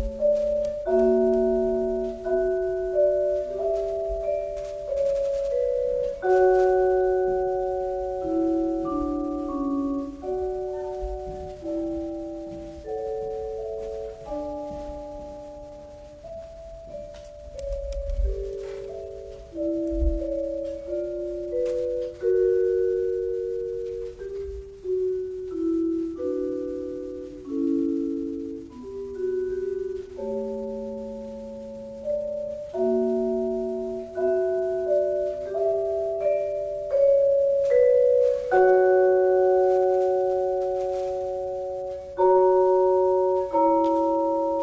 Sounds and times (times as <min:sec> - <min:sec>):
Musical instrument: 0:00.0 - 0:44.6.